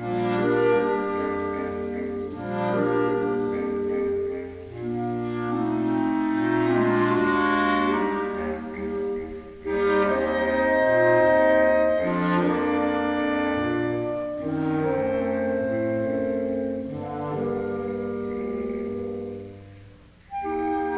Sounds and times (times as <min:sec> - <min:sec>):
Clarinet: 0:00.0 - 0:20.9
Classical music: 0:00.0 - 0:20.9.